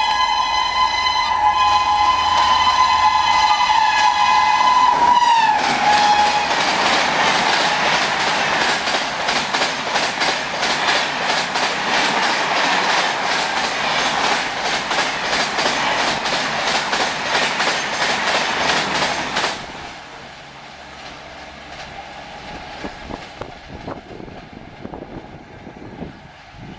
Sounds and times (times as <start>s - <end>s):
Railroad car, train wagon: 0.0s - 26.7s
Train: 0.0s - 26.7s
Clickety-clack: 5.6s - 19.8s.